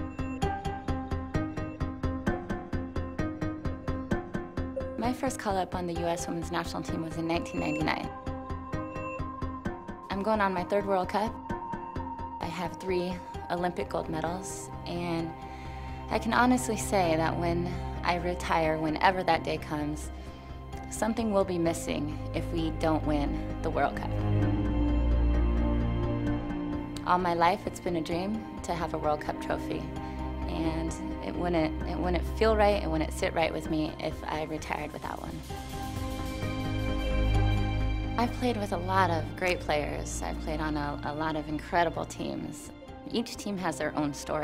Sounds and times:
Music: 0.0 - 44.4
Speech: 5.0 - 8.1, 10.1 - 11.4, 12.4 - 15.4, 16.1 - 20.1, 20.9 - 24.2, 27.0 - 29.9, 30.5 - 35.4, 38.2 - 44.4.

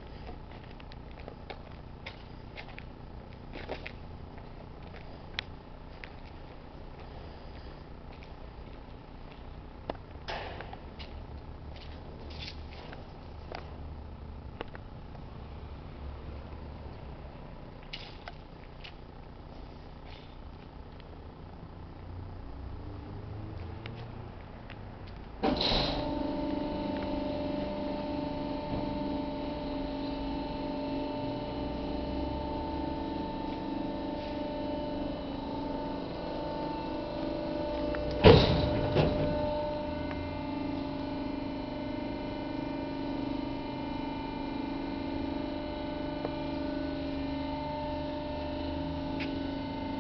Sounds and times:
Hum: 0.0 - 50.0.

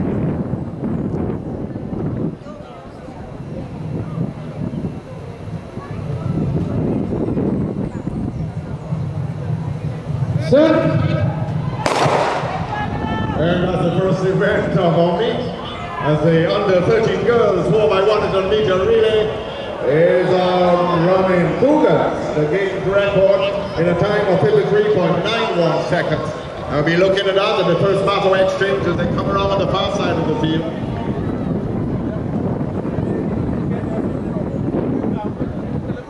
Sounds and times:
Outside, urban or manmade: 0.0 - 36.0
Speech: 12.6 - 31.2.

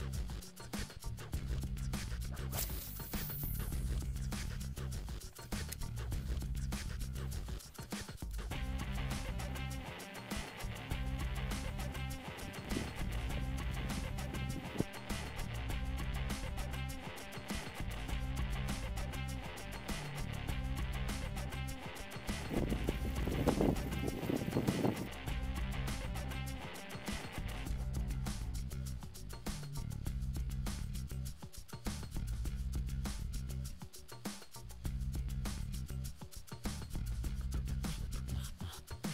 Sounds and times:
Music: 0.0 - 39.1.

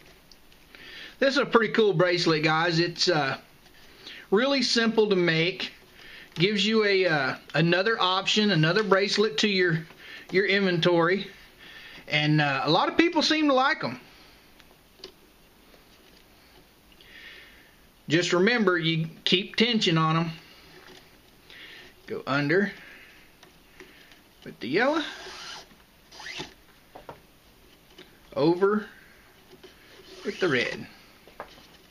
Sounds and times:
Inside, small room: 0.0 - 31.9
Speech: 1.2 - 3.5, 4.3 - 5.8, 6.4 - 11.4, 12.1 - 14.0, 18.1 - 20.4, 22.1 - 22.8, 24.4 - 25.2, 28.3 - 29.0, 30.2 - 31.0.

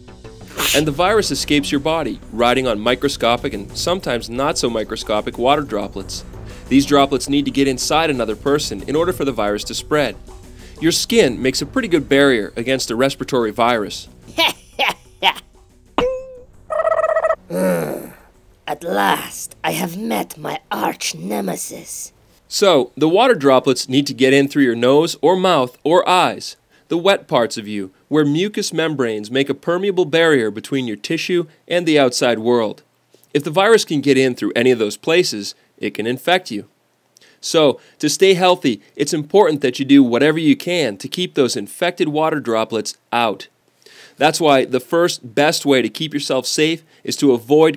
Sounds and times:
Music: 0.0 - 21.2
Speech: 0.6 - 10.2, 10.8 - 15.4, 17.6 - 36.7, 37.4 - 43.5, 44.2 - 47.7.

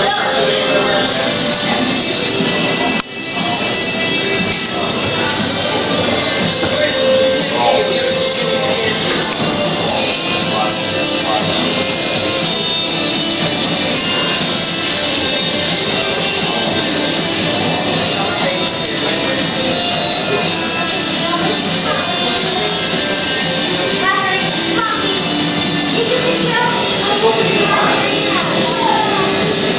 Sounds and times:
Speech: 0.0 - 12.8, 15.8 - 25.3, 25.9 - 29.7
Music: 0.0 - 29.7.

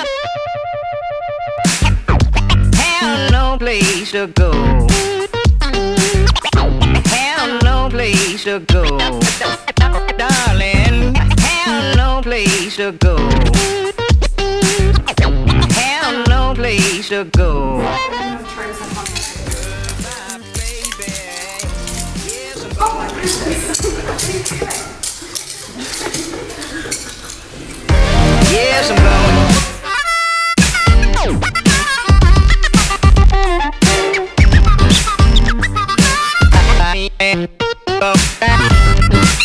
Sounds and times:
Music: 0.0 - 24.6, 27.9 - 39.4
Speech: 10.2 - 11.2, 22.6 - 25.8, 28.4 - 29.5.

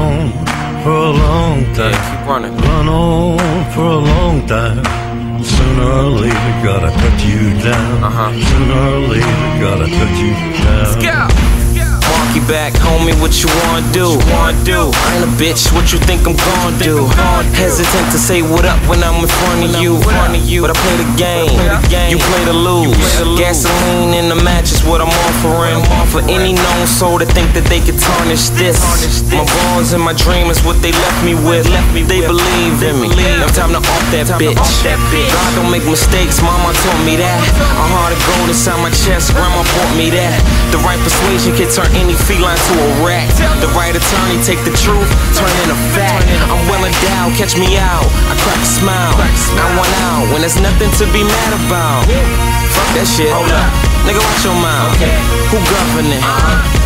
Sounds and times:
Music: 0.0 - 56.8.

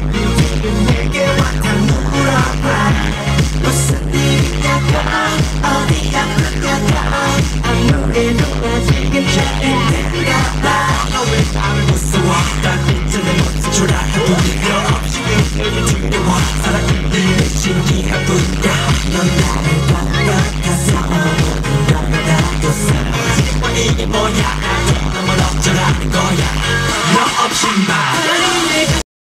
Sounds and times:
Music: 0.0 - 29.1.

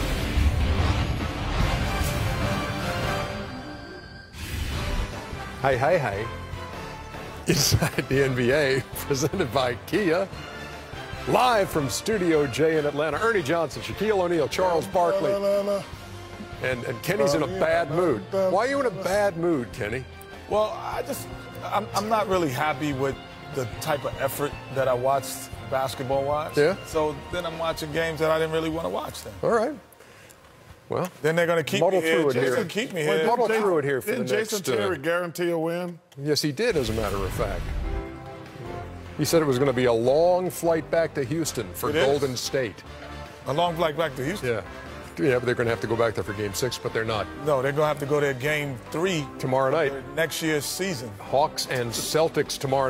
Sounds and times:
Music: 0.0 - 30.5, 31.4 - 35.6, 36.6 - 52.9.

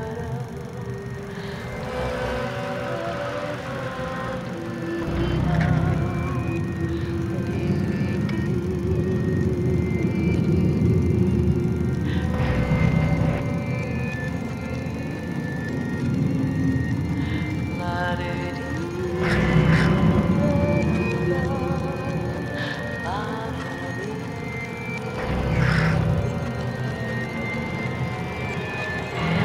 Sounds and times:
Music: 0.0 - 29.4.

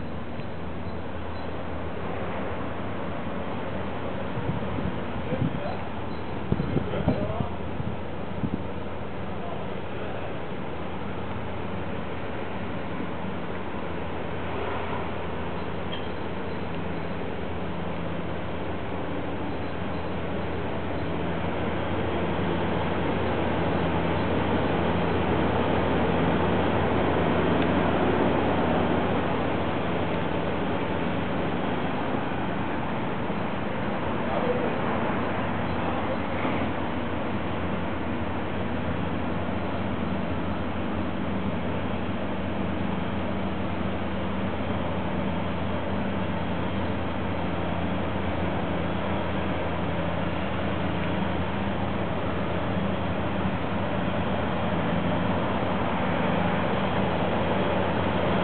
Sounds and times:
Vehicle: 0.0 - 58.4.

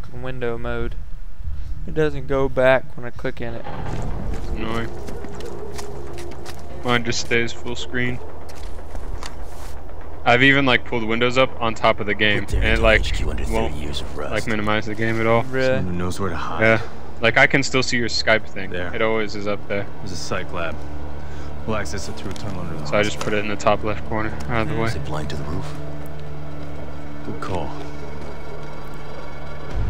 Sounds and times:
Speech: 0.0 - 1.0, 1.9 - 3.7, 6.8 - 8.2, 10.3 - 20.8, 21.7 - 25.8, 27.3 - 27.9.

